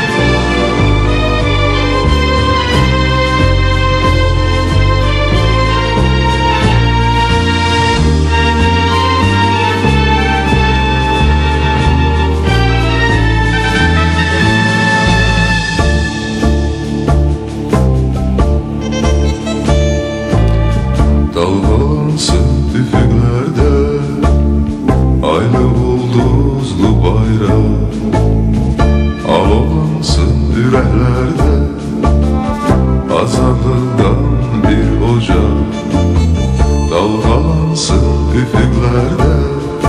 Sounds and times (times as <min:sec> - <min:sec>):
Music: 0:00.0 - 0:39.8.